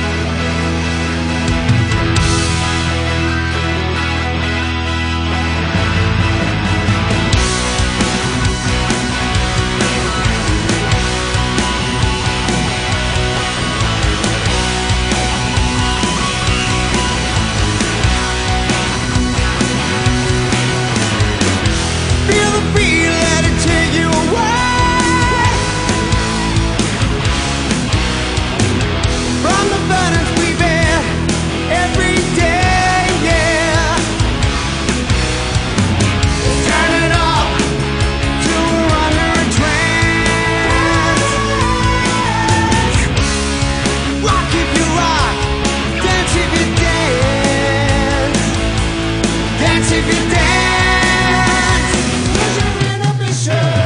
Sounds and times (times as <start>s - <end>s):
Music: 0.0s - 53.8s.